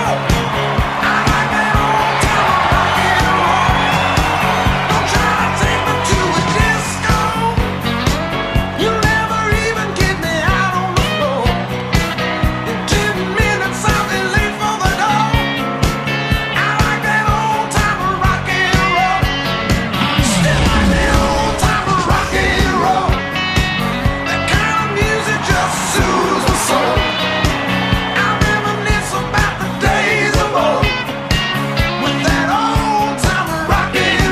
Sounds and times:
Rock and roll: 0.0 - 34.3.

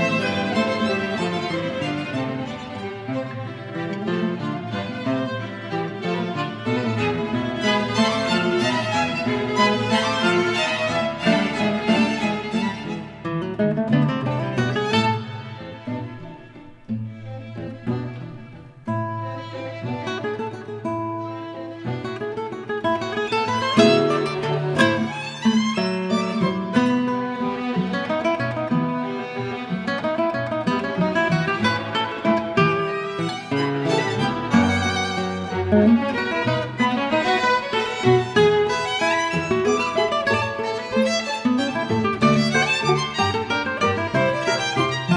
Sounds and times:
Violin, fiddle: 0.0 - 45.1.

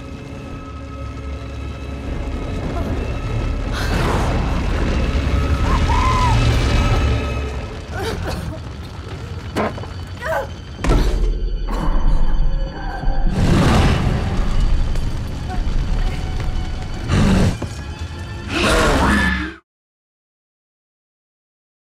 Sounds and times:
Music: 0.0 - 19.6.

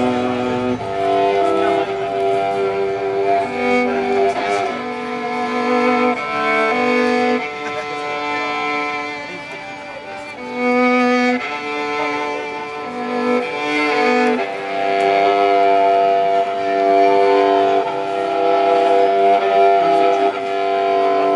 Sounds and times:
Violin, fiddle: 0.0 - 21.3
Speech: 3.4 - 4.9, 7.4 - 10.6, 16.6 - 21.3.

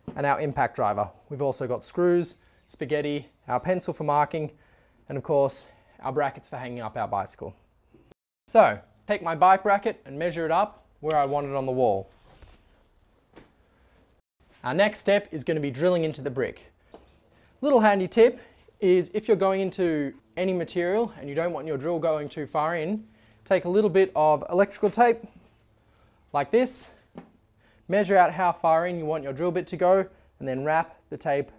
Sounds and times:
Speech: 0.1 - 7.6, 8.5 - 12.1, 14.6 - 16.7, 17.6 - 25.3, 26.3 - 27.0, 27.9 - 31.5.

